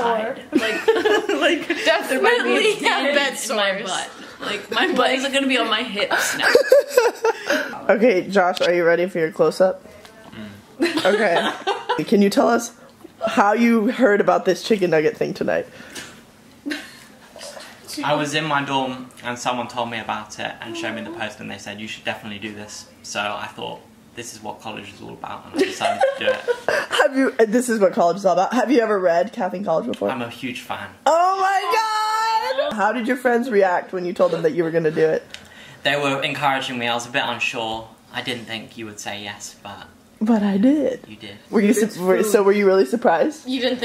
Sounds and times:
Laughter: 0:00.5 - 0:01.8, 0:06.2 - 0:07.6, 0:10.8 - 0:12.1, 0:25.5 - 0:27.2.

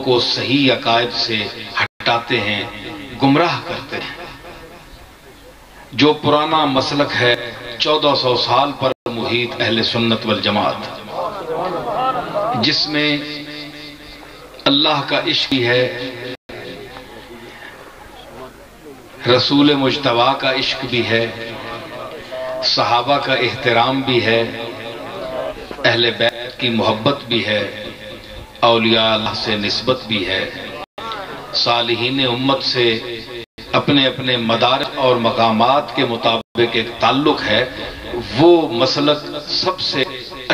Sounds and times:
Male speech, man speaking: 0:00.0 - 0:04.3, 0:05.8 - 0:13.8, 0:14.6 - 0:40.5
Narration, monologue: 0:00.0 - 0:40.5.

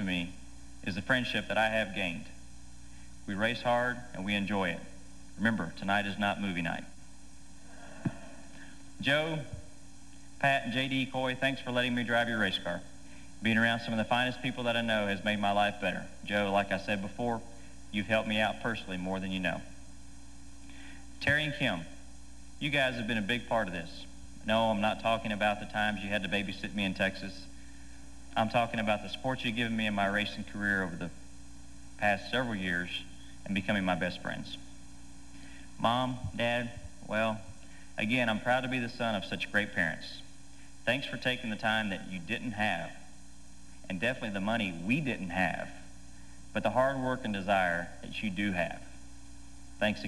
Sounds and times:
Male speech, man speaking: 0:00.0 - 0:02.4, 0:03.3 - 0:07.0, 0:09.0 - 0:09.7, 0:10.4 - 0:19.8, 0:21.2 - 0:22.0, 0:22.6 - 0:27.5, 0:28.4 - 0:31.2, 0:32.0 - 0:34.7, 0:35.8 - 0:40.3, 0:40.9 - 0:43.1, 0:43.9 - 0:45.9, 0:46.6 - 0:48.9, 0:49.8 - 0:50.0.

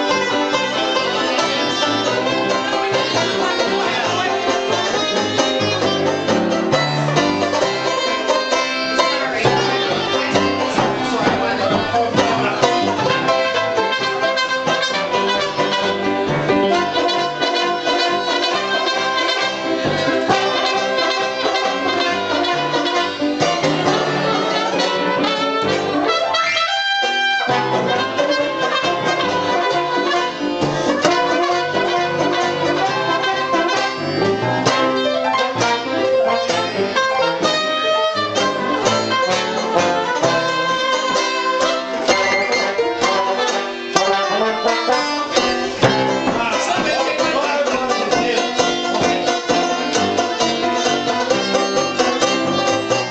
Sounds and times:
Trumpet: 0:00.0 - 0:53.1
Violin, fiddle: 0:00.0 - 0:53.1.

